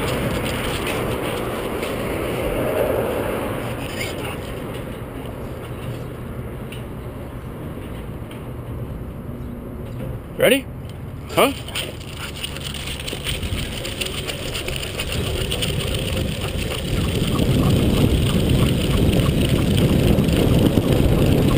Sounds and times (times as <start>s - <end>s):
Bicycle: 0.0s - 6.9s, 11.6s - 21.5s.